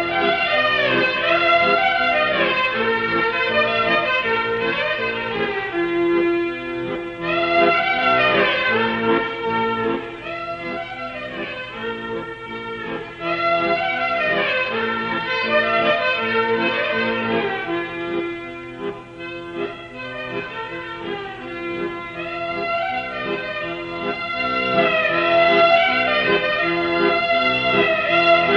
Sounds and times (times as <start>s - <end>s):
Violin, fiddle: 0.0s - 28.5s.